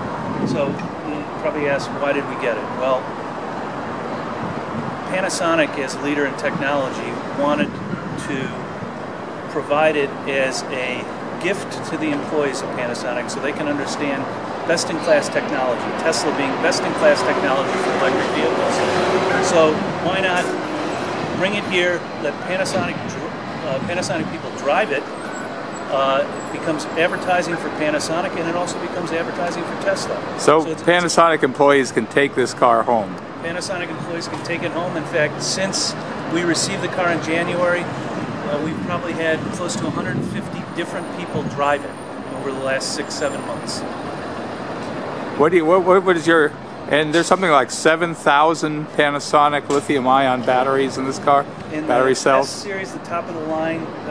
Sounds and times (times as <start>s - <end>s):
Vehicle: 0.0s - 54.1s
Speech: 0.4s - 3.0s, 5.1s - 8.6s, 9.5s - 20.6s, 21.4s - 25.1s, 25.9s - 43.8s, 45.4s - 54.1s.